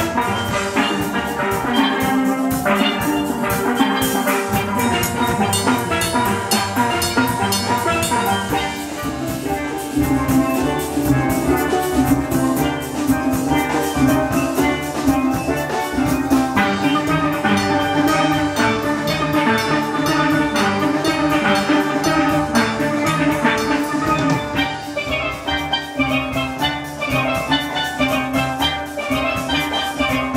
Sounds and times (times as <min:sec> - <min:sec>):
Steelpan: 0:00.0 - 0:30.3.